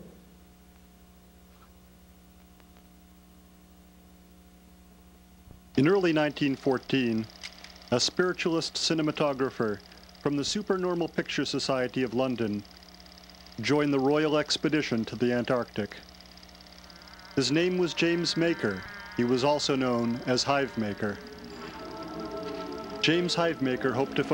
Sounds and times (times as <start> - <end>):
Television: 0.0 - 24.3
Speech: 5.8 - 7.3, 7.9 - 12.6, 13.6 - 16.0, 17.4 - 21.2, 23.0 - 24.3
Music: 17.3 - 24.3.